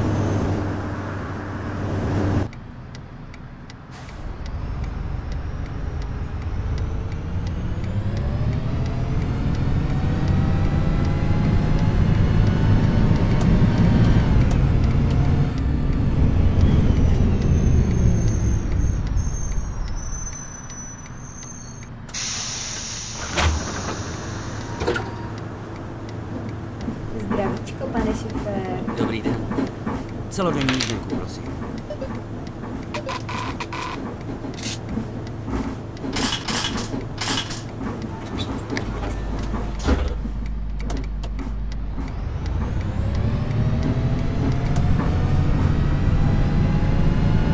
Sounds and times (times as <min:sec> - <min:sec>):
Bus: 0:00.0 - 0:47.5.